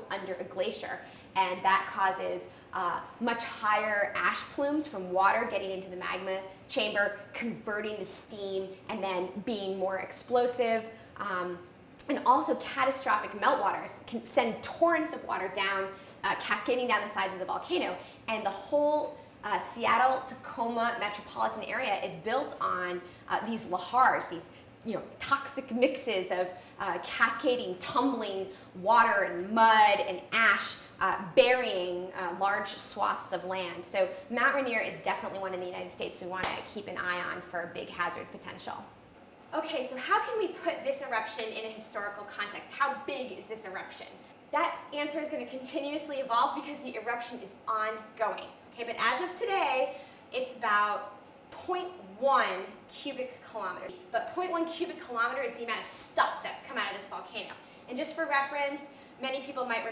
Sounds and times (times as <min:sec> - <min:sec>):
Female speech, woman speaking: 0:00.0 - 0:38.9, 0:39.5 - 0:59.9.